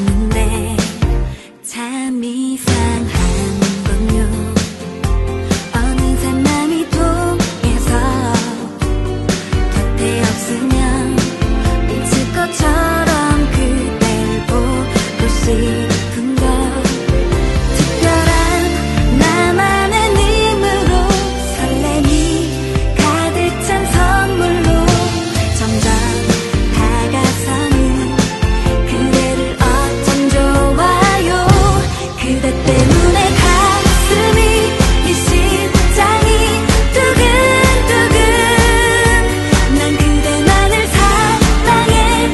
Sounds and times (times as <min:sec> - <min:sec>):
Music: 0:00.0 - 0:42.3.